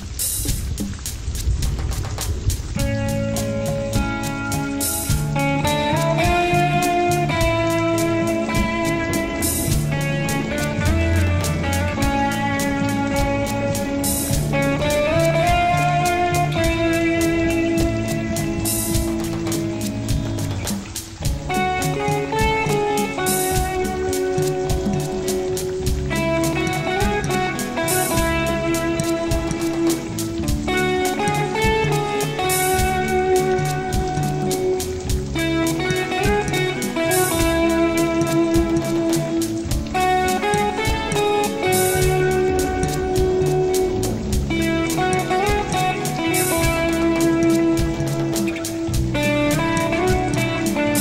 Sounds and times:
Music: 0.0 - 51.0.

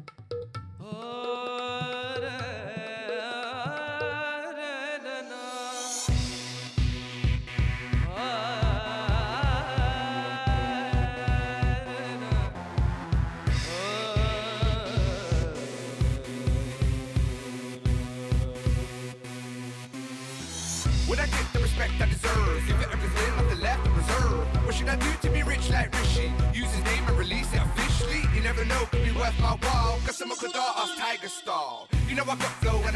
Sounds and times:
Music: 0.0 - 32.9.

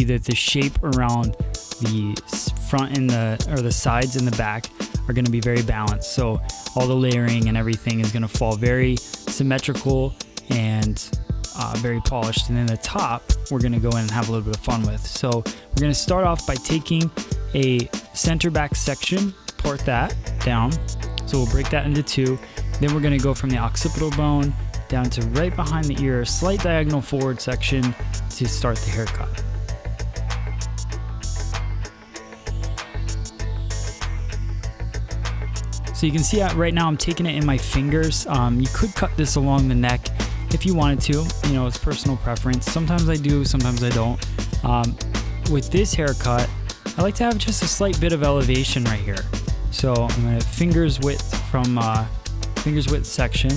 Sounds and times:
Speech: 0.0 - 29.4, 36.0 - 53.5
Music: 0.0 - 53.5.

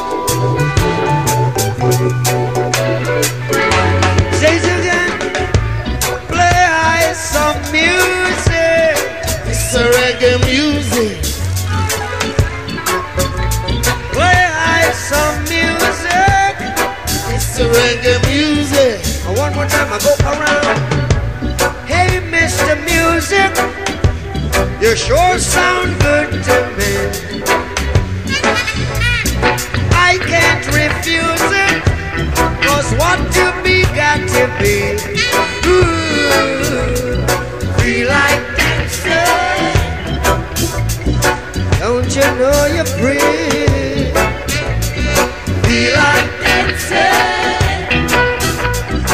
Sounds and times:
Music: 0.0 - 49.1.

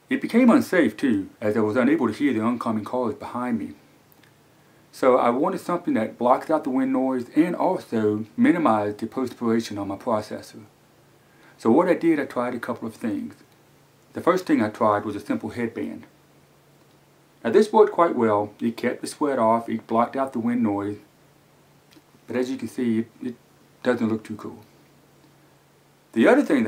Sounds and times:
Speech: 0.1 - 3.8, 4.9 - 10.7, 11.6 - 13.5, 14.1 - 16.2, 17.4 - 21.1, 22.3 - 24.7, 26.1 - 26.6.

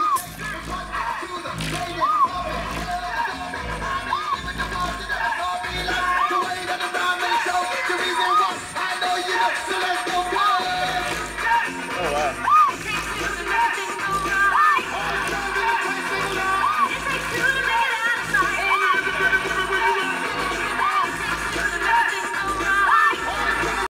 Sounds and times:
Music: 0.0 - 23.9.

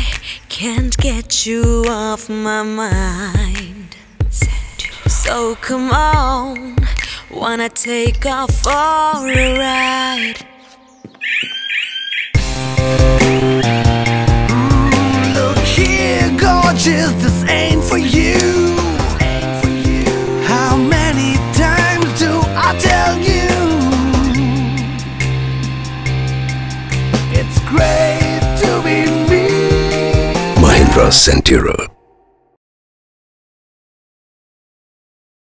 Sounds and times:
Music: 0.0 - 11.0, 12.4 - 31.2
Speech: 30.6 - 32.0.

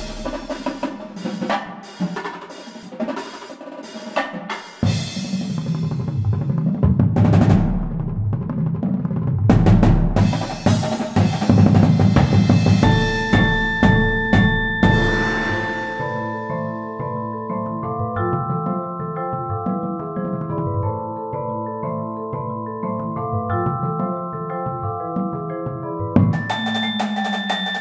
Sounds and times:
Bass drum: 0.0 - 1.2, 4.8 - 16.3
Drum kit: 0.0 - 20.9, 24.7 - 27.8.

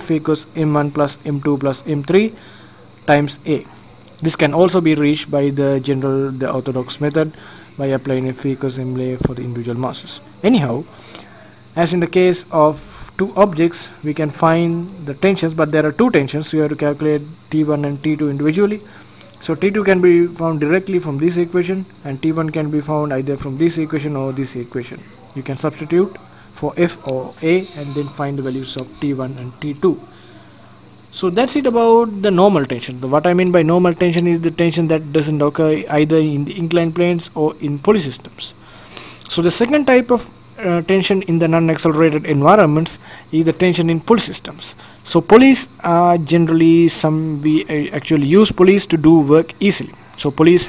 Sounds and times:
Speech: 0.0 - 2.4, 3.0 - 38.6, 39.3 - 50.6.

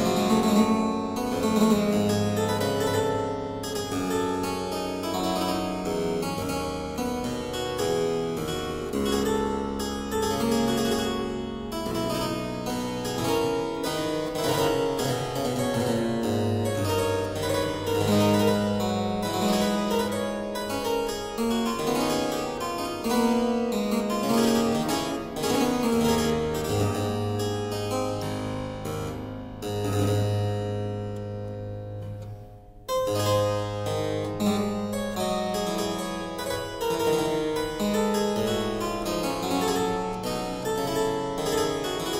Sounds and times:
Harpsichord: 0.0 - 42.1.

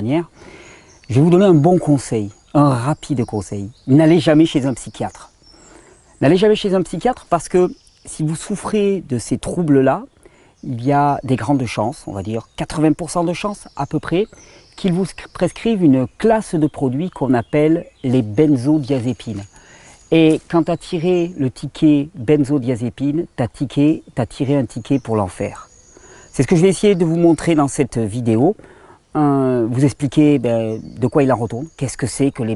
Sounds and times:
Speech: 0.0 - 0.3, 1.1 - 5.3, 6.2 - 19.5, 20.1 - 25.7, 26.3 - 28.6, 29.2 - 32.5.

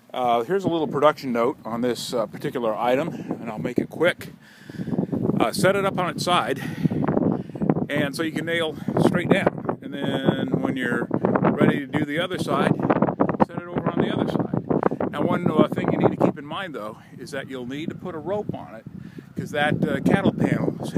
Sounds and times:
Speech: 0.1 - 4.3, 5.4 - 6.6, 7.9 - 12.7, 13.4 - 18.8, 19.4 - 20.9.

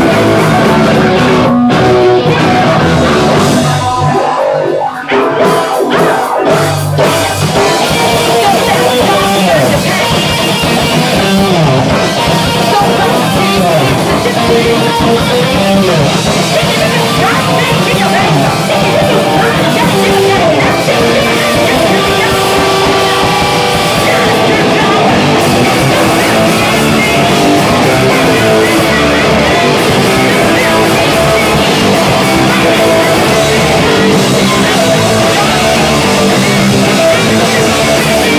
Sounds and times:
Music: 0.0 - 38.3
Speech: 7.9 - 11.7, 12.5 - 23.0.

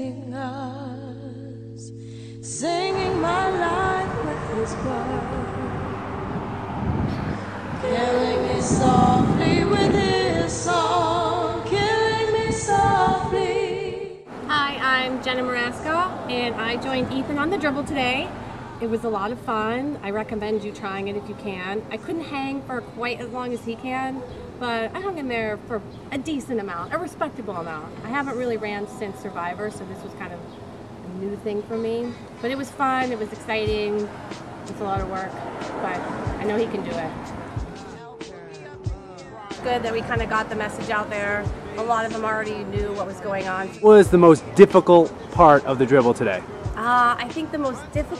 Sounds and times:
Music: 0.0 - 5.6, 7.9 - 14.3, 32.5 - 48.1.

